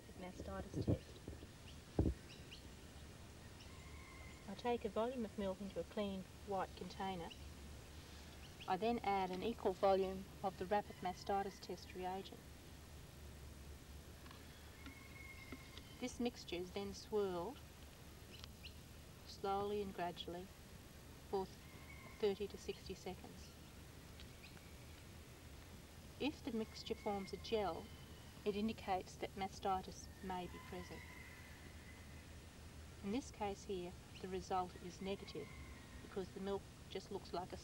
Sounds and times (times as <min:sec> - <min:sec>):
Speech: 0:00.0 - 0:01.1, 0:04.5 - 0:07.4, 0:08.7 - 0:12.4, 0:16.0 - 0:17.6, 0:19.3 - 0:20.5, 0:21.4 - 0:21.6, 0:22.2 - 0:23.5, 0:26.2 - 0:27.9, 0:28.5 - 0:31.0, 0:33.0 - 0:35.5, 0:36.1 - 0:37.6.